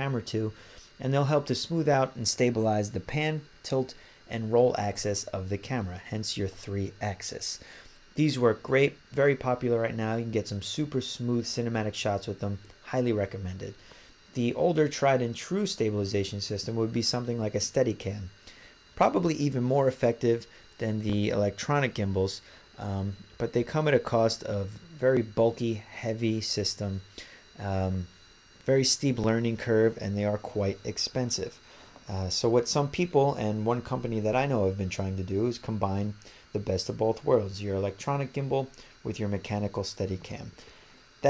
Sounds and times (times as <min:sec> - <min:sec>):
Speech: 0:00.0 - 0:07.6, 0:08.2 - 0:18.4, 0:19.0 - 0:40.6.